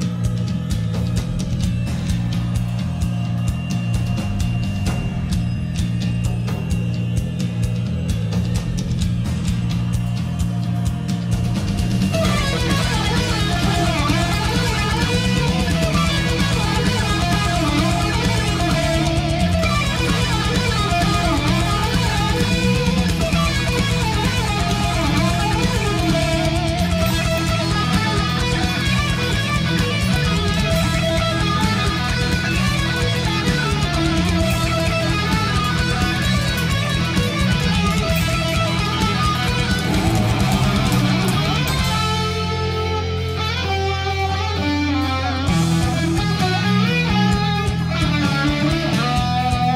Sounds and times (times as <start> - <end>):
Strum: 10.8 - 49.7.